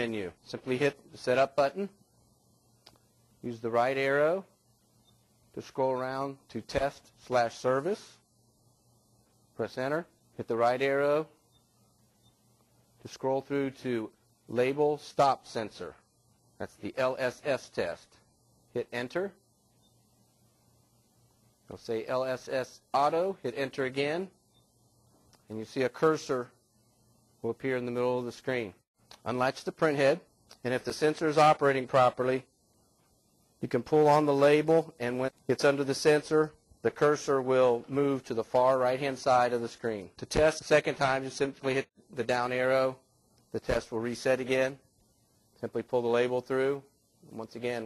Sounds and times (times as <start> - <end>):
Speech: 0.0 - 2.0, 3.4 - 4.5, 5.6 - 8.2, 9.6 - 11.4, 13.0 - 16.0, 16.6 - 19.4, 21.7 - 24.3, 25.5 - 26.6, 27.4 - 32.5, 33.6 - 44.8, 45.6 - 47.8.